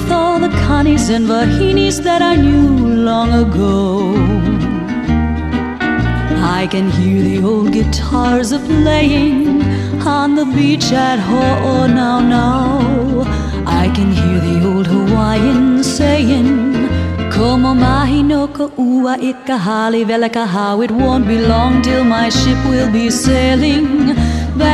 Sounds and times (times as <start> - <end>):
Happy music: 0.0 - 24.7.